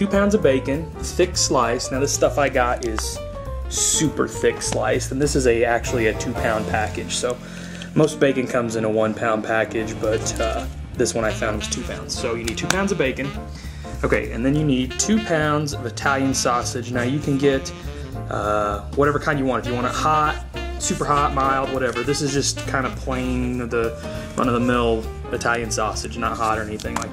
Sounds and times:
Speech: 0:00.0 - 0:07.4, 0:08.0 - 0:13.4, 0:14.0 - 0:27.1
Music: 0:00.0 - 0:27.1.

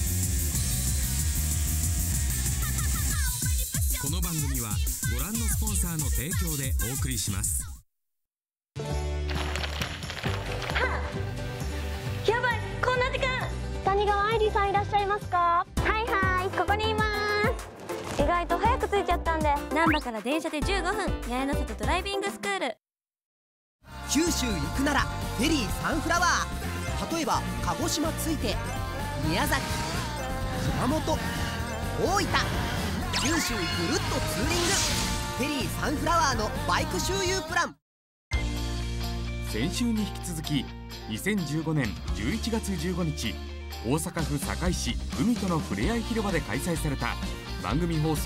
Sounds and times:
Music: 0:00.0 - 0:07.8, 0:08.8 - 0:22.8, 0:23.8 - 0:48.2.

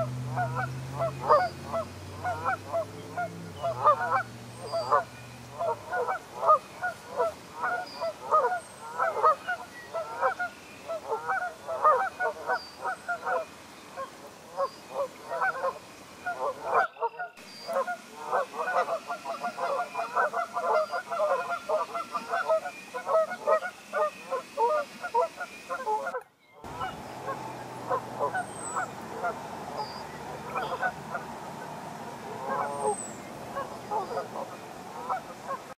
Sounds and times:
Honk: 0:00.0 - 0:13.4, 0:15.3 - 0:31.2, 0:32.3 - 0:35.7.

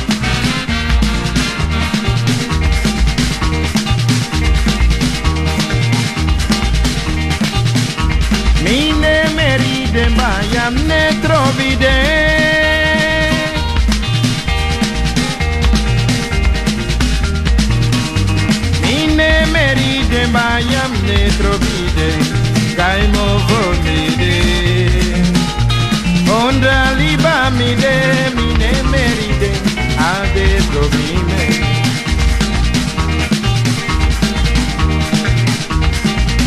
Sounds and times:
Music: 0:00.0 - 0:36.4.

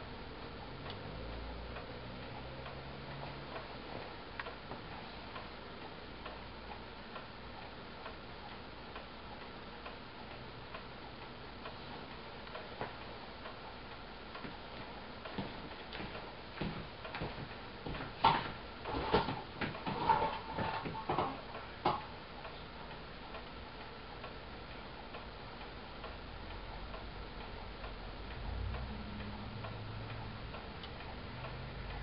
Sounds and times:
Tick-tock: 0:00.3 - 0:16.3, 0:21.5 - 0:32.0.

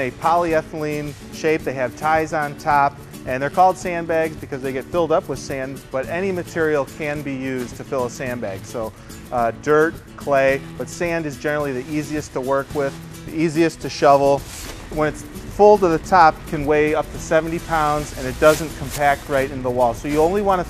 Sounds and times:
Speech: 0:00.0 - 0:14.4, 0:15.0 - 0:20.7
Music: 0:00.0 - 0:20.7.

